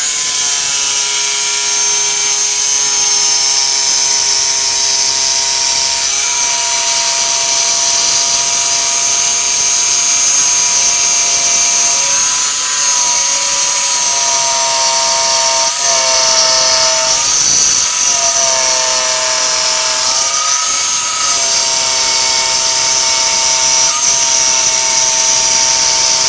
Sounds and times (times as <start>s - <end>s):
Drill: 0.0s - 26.2s.